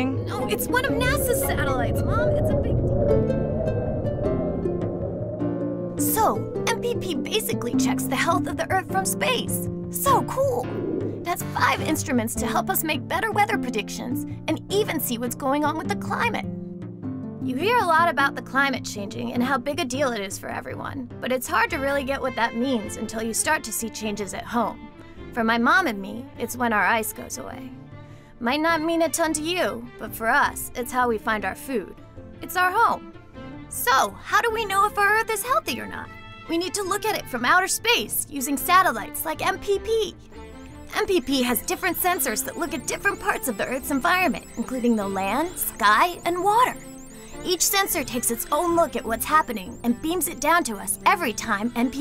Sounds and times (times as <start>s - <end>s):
Speech: 0.0s - 2.8s, 6.0s - 10.7s, 11.3s - 16.5s, 17.5s - 24.8s, 25.4s - 27.7s, 28.4s - 33.0s, 33.8s - 40.2s, 40.9s - 46.8s, 47.5s - 52.0s
Music: 0.0s - 52.0s.